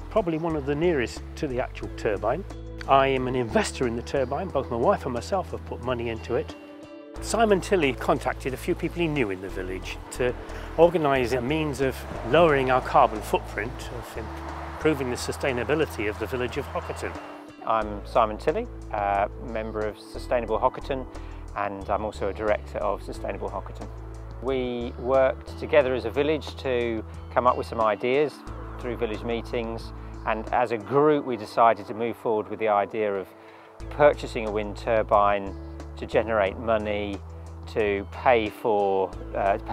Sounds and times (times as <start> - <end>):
Music: 0.0 - 39.7
Speech: 0.1 - 6.6, 7.2 - 33.3, 33.9 - 39.7.